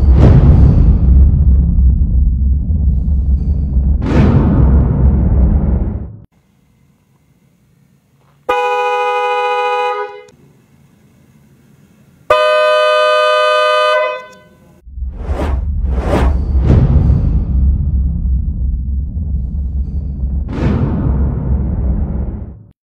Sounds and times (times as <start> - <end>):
Music: 0.0 - 5.4, 15.0 - 22.7
Vehicle horn, car horn, honking: 8.5 - 10.4, 12.3 - 14.8.